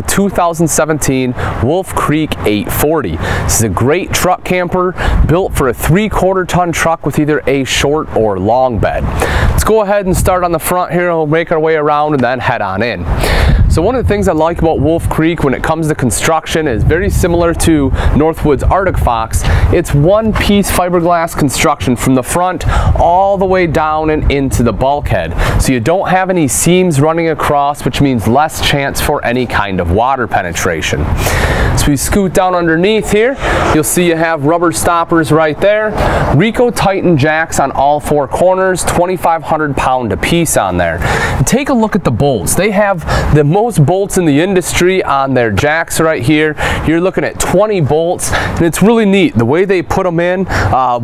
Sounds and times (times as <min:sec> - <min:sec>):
Speech: 0:00.0 - 0:13.1, 0:13.7 - 0:31.1, 0:31.8 - 0:51.0.